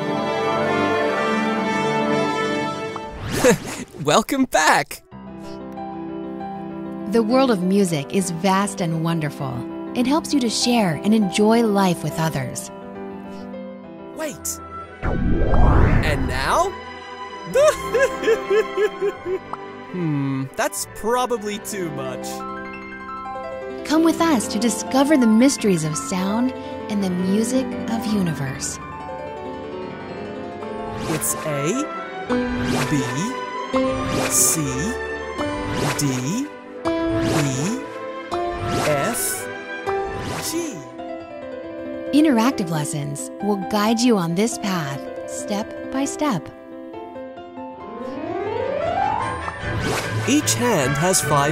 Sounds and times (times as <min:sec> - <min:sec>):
Background music: 0:00.0 - 0:51.5
Speech: 0:03.5 - 0:05.0, 0:07.1 - 0:12.7, 0:14.2 - 0:14.6, 0:16.0 - 0:16.8, 0:20.0 - 0:22.4, 0:23.9 - 0:28.8, 0:31.1 - 0:31.9, 0:32.9 - 0:33.4, 0:34.3 - 0:35.0, 0:36.0 - 0:36.5, 0:37.3 - 0:37.8, 0:38.8 - 0:39.5, 0:40.4 - 0:40.9, 0:42.2 - 0:46.5, 0:50.3 - 0:51.5.